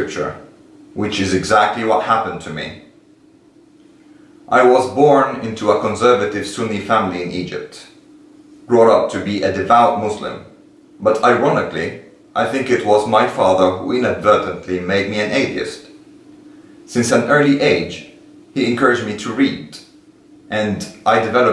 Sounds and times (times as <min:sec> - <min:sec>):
Speech: 0:00.0 - 0:02.9, 0:04.5 - 0:08.0, 0:08.7 - 0:16.0, 0:16.9 - 0:21.5.